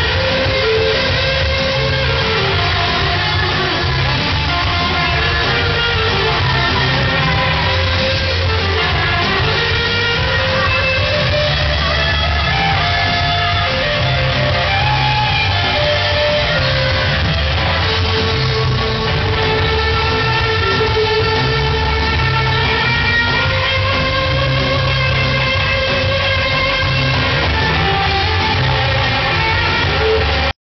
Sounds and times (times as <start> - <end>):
Music: 0.0 - 30.6.